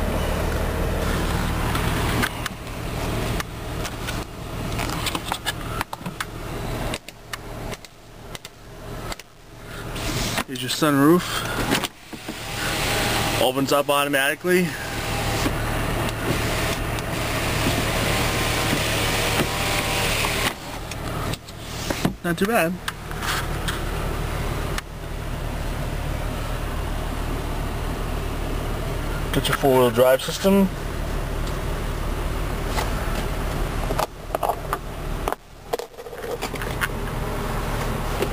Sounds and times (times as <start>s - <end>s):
Engine: 0.0s - 38.3s
Power windows, electric windows: 10.0s - 10.5s, 11.5s - 13.6s, 14.8s - 22.2s
Speech: 10.4s - 11.4s, 13.4s - 14.8s, 22.2s - 22.8s, 29.3s - 30.8s.